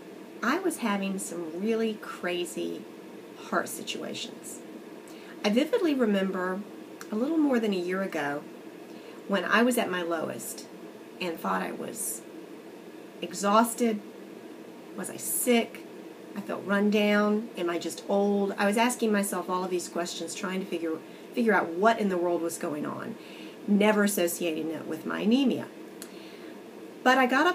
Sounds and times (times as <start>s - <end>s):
Speech: 0.4s - 2.8s, 3.4s - 4.6s, 5.4s - 8.4s, 9.3s - 12.2s, 13.2s - 14.0s, 15.0s - 15.8s, 16.4s - 25.7s, 27.1s - 27.5s.